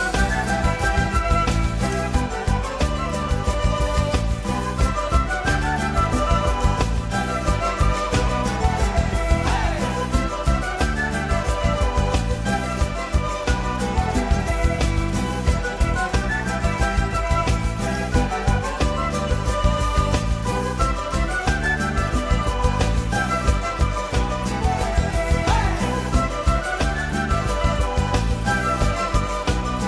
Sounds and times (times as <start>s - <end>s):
Music: 0.0s - 29.8s.